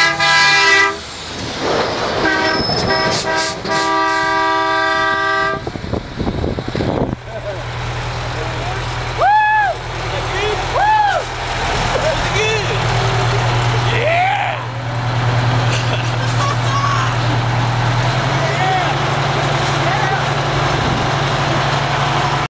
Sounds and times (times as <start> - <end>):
Truck: 0.0 - 22.5
Speech: 12.0 - 14.7, 16.2 - 17.3, 18.4 - 19.0, 19.7 - 20.3.